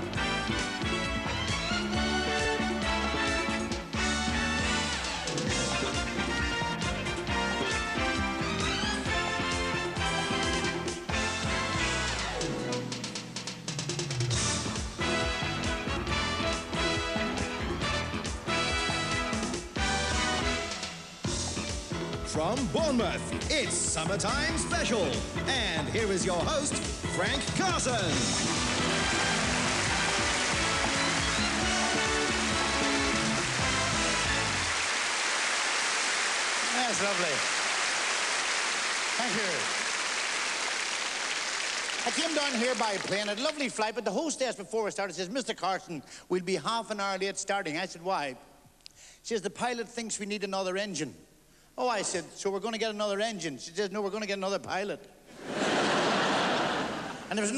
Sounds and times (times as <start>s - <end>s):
Music: 0.0s - 47.2s
Speech: 22.3s - 28.2s, 36.7s - 37.4s, 39.2s - 39.7s, 42.0s - 48.4s, 49.2s - 51.2s, 51.8s - 55.1s, 57.3s - 57.5s.